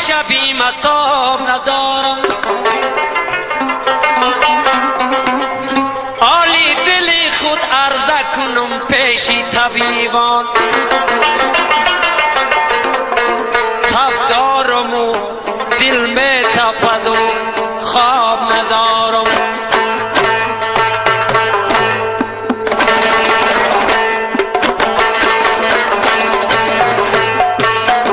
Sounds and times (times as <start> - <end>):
Music: 0.0 - 28.1.